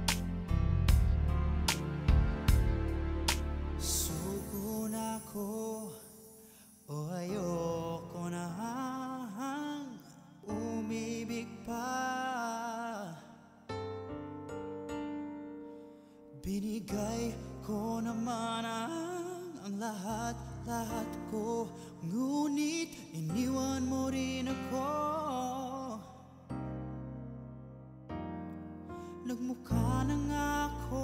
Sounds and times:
Music: 0:00.0 - 0:31.0.

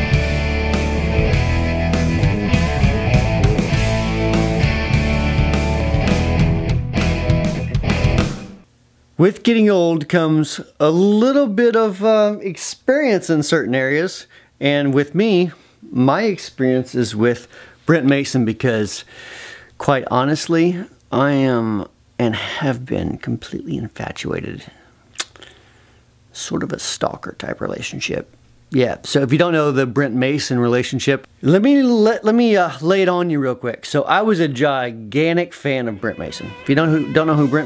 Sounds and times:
Music: 0:00.0 - 0:08.7, 0:35.7 - 0:37.6
Speech: 0:09.2 - 0:19.1, 0:19.8 - 0:24.8, 0:26.3 - 0:37.6.

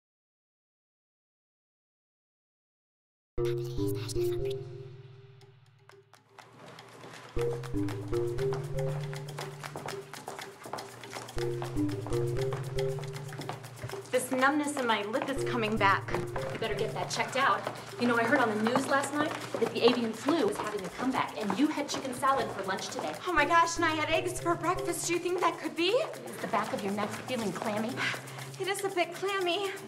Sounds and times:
Music: 0:03.4 - 0:29.8
Speech: 0:14.2 - 0:29.8.

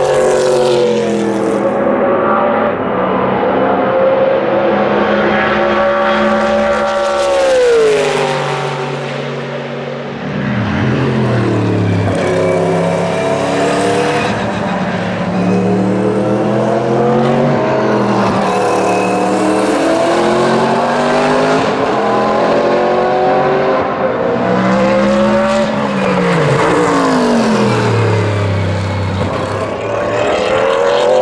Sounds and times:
Race car, auto racing: 0:00.0 - 0:31.2.

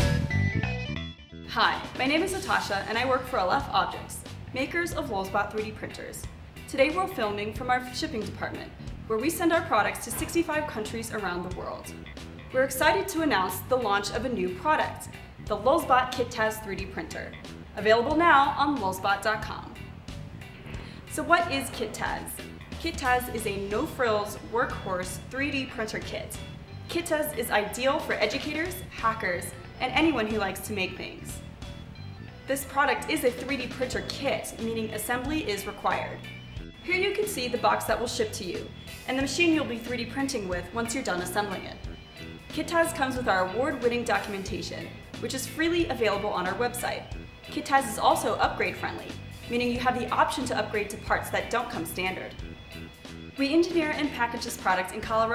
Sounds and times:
Music: 0:00.0 - 0:55.3
Speech: 0:01.5 - 0:11.9, 0:12.6 - 0:19.8, 0:21.1 - 0:31.4, 0:32.5 - 0:36.2, 0:36.9 - 0:41.8, 0:42.5 - 0:52.3, 0:53.4 - 0:55.3.

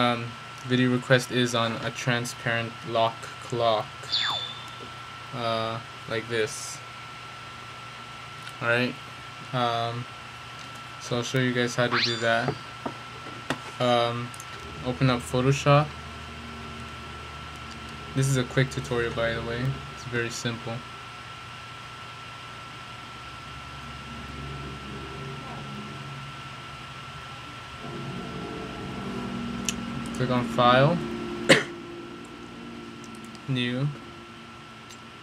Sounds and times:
Speech: 0:00.0 - 0:04.0, 0:05.4 - 0:06.8, 0:08.5 - 0:10.1, 0:11.0 - 0:12.6, 0:13.8 - 0:15.9, 0:18.1 - 0:20.8, 0:30.1 - 0:31.0, 0:33.5 - 0:34.0.

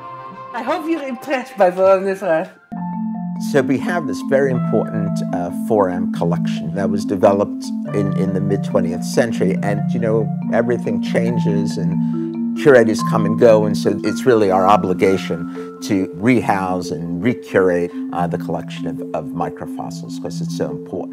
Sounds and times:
Glockenspiel: 0:02.7 - 0:21.1
Marimba, xylophone: 0:07.8 - 0:21.1.

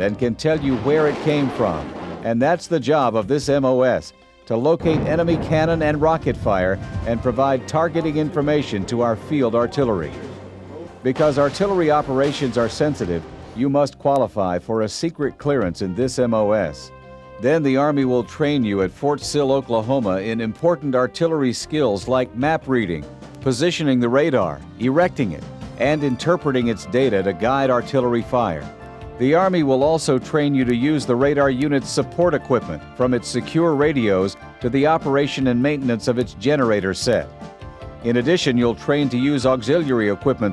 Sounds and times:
Speech: 0:00.0 - 0:37.3, 0:38.0 - 0:40.5
Music: 0:00.0 - 0:40.5
Artillery fire: 0:00.6 - 0:02.4, 0:04.8 - 0:07.4, 0:11.1 - 0:13.6.

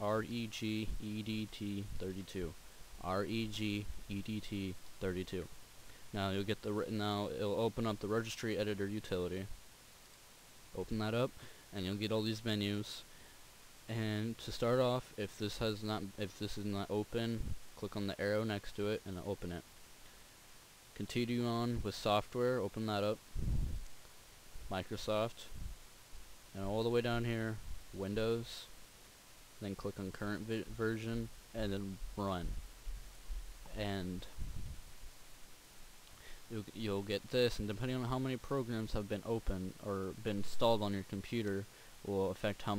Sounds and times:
Speech: 0:00.0 - 0:05.5, 0:06.1 - 0:09.6, 0:10.7 - 0:13.1, 0:13.9 - 0:19.7, 0:21.0 - 0:23.2, 0:24.7 - 0:25.6, 0:26.5 - 0:28.8, 0:29.6 - 0:32.6, 0:33.7 - 0:34.4, 0:36.5 - 0:42.7.

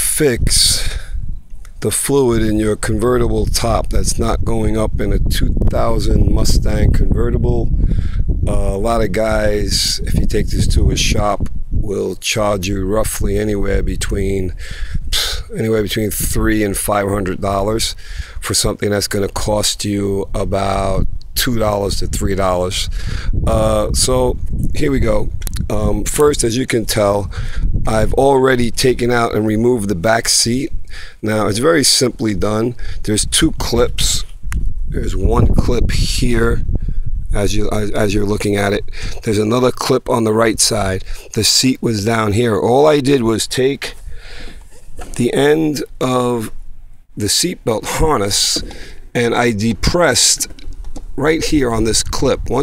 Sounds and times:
Speech: 0:00.0 - 0:01.0, 0:01.8 - 0:07.7, 0:08.5 - 0:22.9, 0:23.5 - 0:27.3, 0:27.9 - 0:34.3, 0:35.0 - 0:36.6, 0:37.3 - 0:44.0, 0:45.1 - 0:46.6, 0:47.2 - 0:50.5, 0:51.2 - 0:52.6.

